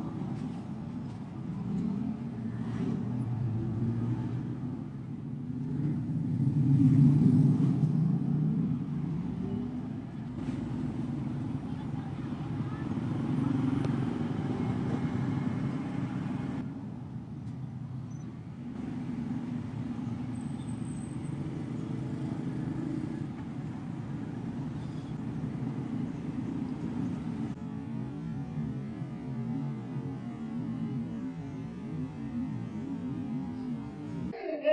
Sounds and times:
Outside, urban or manmade: 0.0 - 34.7
Speech: 11.5 - 13.8, 34.4 - 34.7.

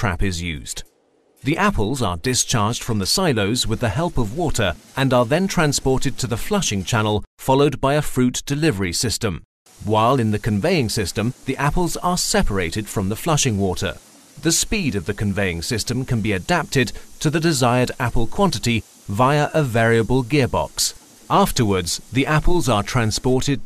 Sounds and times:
Speech synthesizer: 0.0 - 0.8, 1.5 - 23.6.

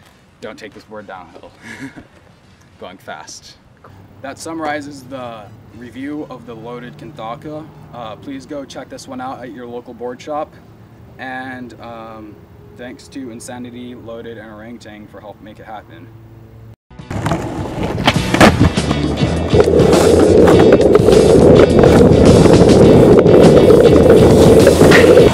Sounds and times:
Skateboard: 17.0 - 25.3.

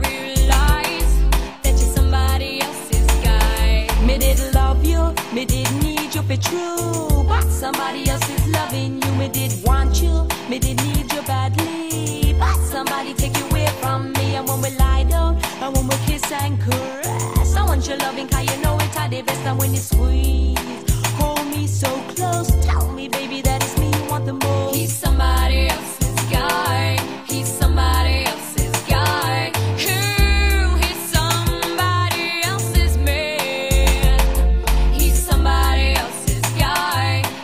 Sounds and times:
Soul music: 0.0 - 37.4.

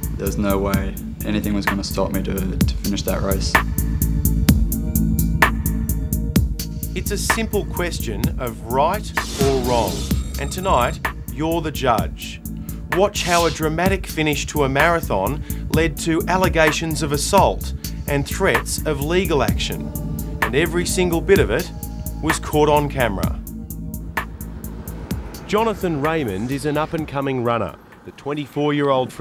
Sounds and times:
Music: 0.0 - 29.2
Speech: 0.2 - 3.6, 7.0 - 19.8, 20.5 - 23.4, 25.5 - 29.2.

